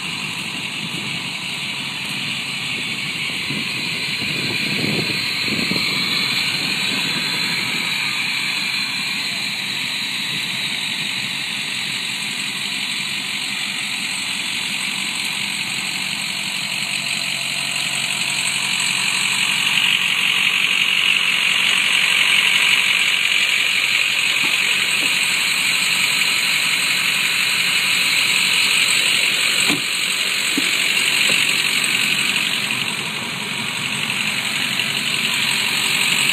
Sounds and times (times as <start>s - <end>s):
Truck: 0.0s - 36.3s.